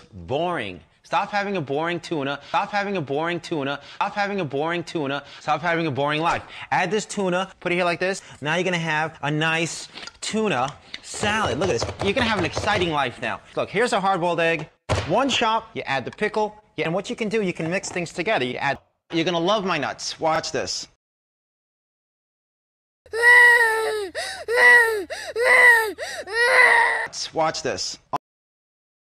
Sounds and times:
Chopping (food): 11.2s - 13.0s.

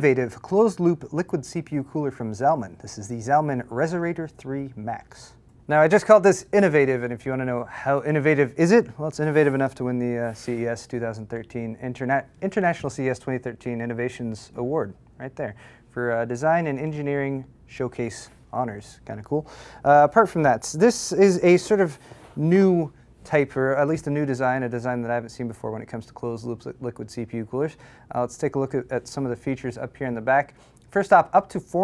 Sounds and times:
Speech: 0.0s - 31.8s.

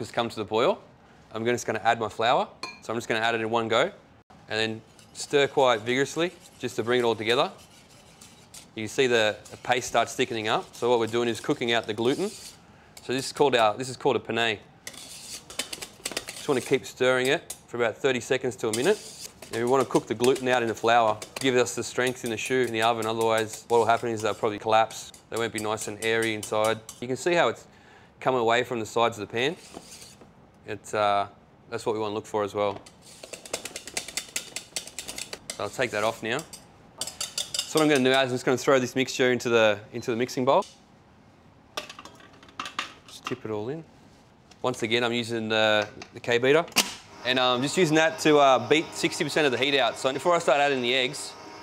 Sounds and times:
Cutlery, silverware: 36.4s - 38.1s.

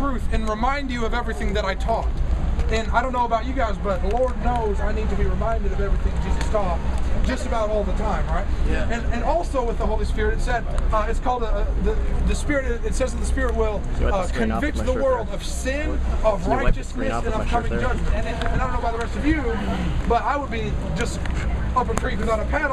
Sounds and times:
Speech: 2.7s - 22.7s.

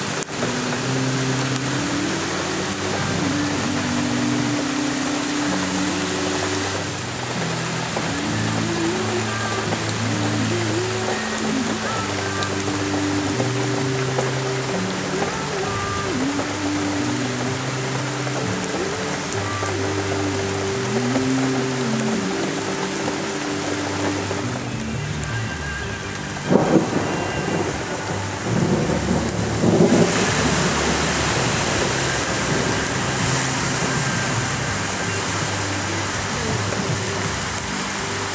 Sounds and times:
Music: 0.0s - 38.3s.

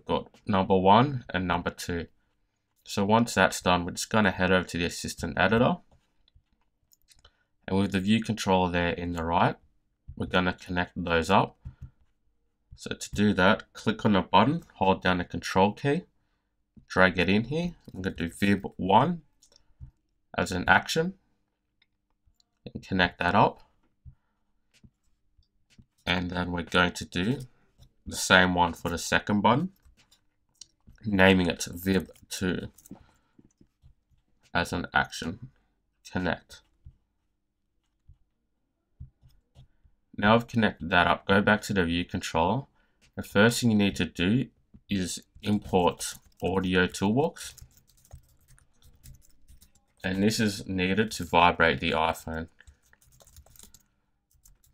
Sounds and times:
Speech: 0.0s - 2.1s, 2.8s - 5.9s, 7.7s - 9.6s, 10.2s - 11.6s, 12.8s - 16.1s, 16.9s - 19.3s, 20.3s - 21.2s, 22.6s - 23.6s, 26.1s - 27.5s, 28.1s - 29.8s, 31.0s - 32.8s, 34.5s - 35.5s, 36.1s - 36.6s, 40.2s - 47.6s, 50.0s - 52.6s
Computer keyboard: 45.4s - 50.5s, 52.1s - 54.7s.

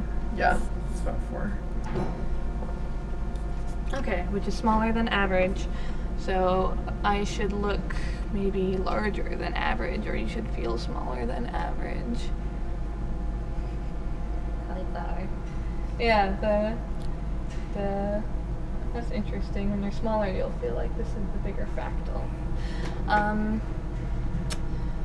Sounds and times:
Speech: 0.4s - 1.6s, 3.9s - 12.3s, 14.7s - 15.3s, 16.0s - 16.8s, 17.8s - 18.3s, 19.0s - 22.3s, 23.1s - 23.6s.

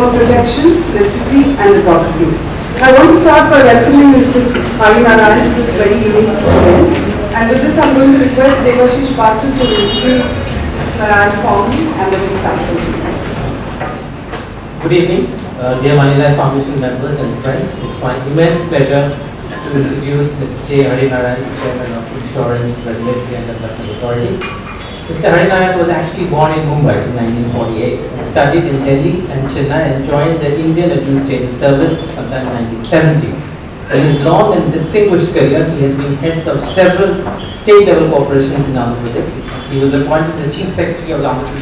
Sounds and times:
Narration, monologue: 0.0s - 41.6s
Male speech, man speaking: 5.0s - 7.0s, 14.8s - 24.5s, 25.1s - 41.6s.

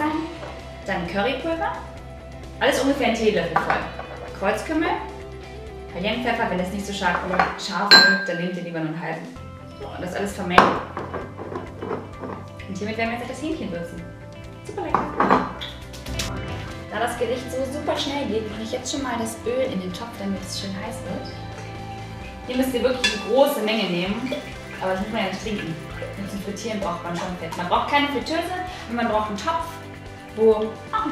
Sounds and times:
Speech: 0.0s - 1.8s, 2.6s - 5.1s, 5.9s - 10.8s, 12.7s - 14.0s, 14.6s - 15.2s, 16.9s - 21.4s, 22.5s - 29.8s, 30.4s - 31.1s
Music: 0.0s - 31.1s.

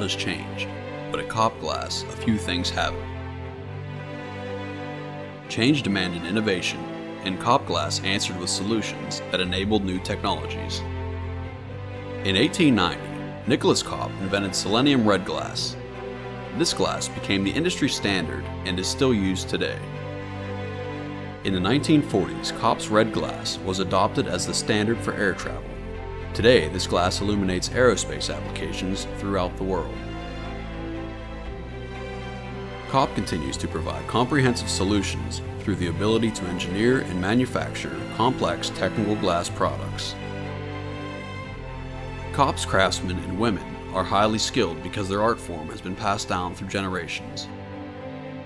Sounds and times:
Speech: 0.0s - 3.0s, 5.5s - 10.9s, 12.2s - 15.8s, 16.6s - 19.9s, 21.4s - 25.8s, 26.4s - 30.0s, 32.9s - 40.2s, 42.3s - 47.5s
Music: 0.0s - 48.4s.

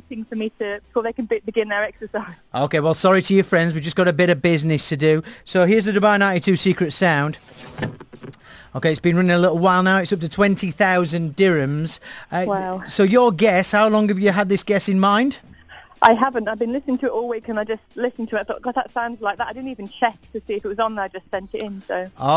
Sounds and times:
Speech: 0.0s - 7.4s, 8.8s - 15.4s, 16.0s - 22.3s.

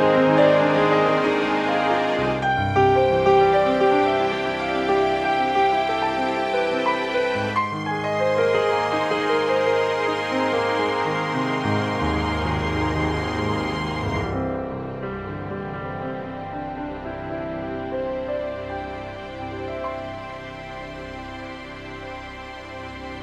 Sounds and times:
Music: 0.0s - 23.2s.

